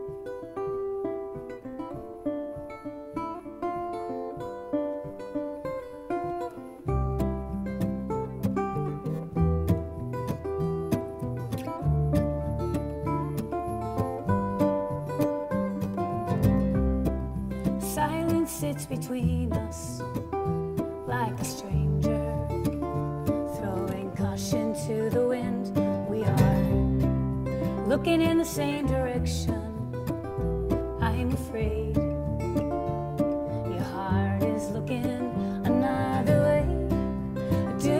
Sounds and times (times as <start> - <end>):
Music: 0.0 - 37.9.